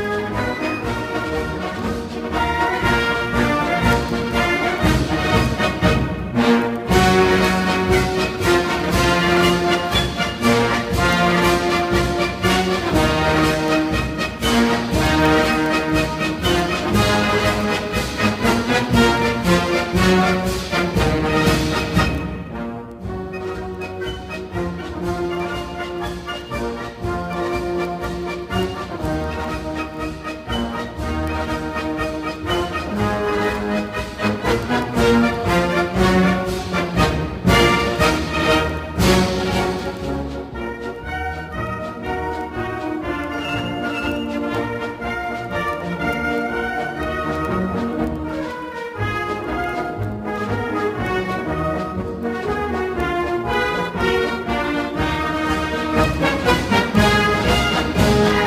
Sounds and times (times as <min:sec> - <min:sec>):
Exciting music: 0:00.0 - 0:58.4.